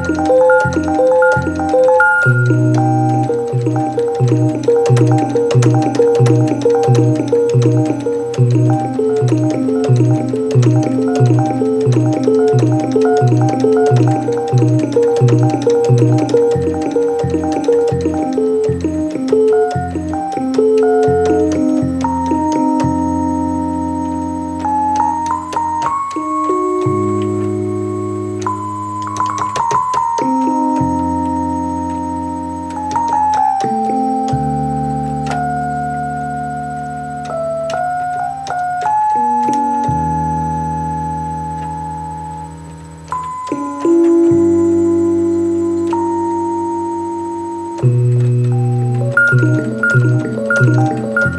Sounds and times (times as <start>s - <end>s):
Inside, small room: 0.0s - 51.3s
Music: 0.0s - 51.3s.